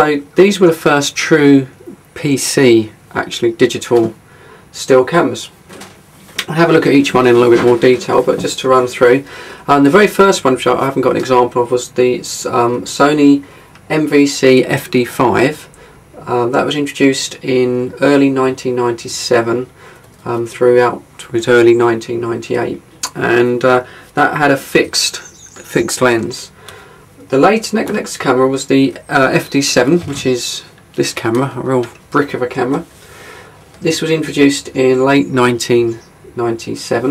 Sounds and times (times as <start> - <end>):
Speech: 0.0 - 5.6, 6.4 - 26.6, 27.2 - 32.9, 33.8 - 37.1.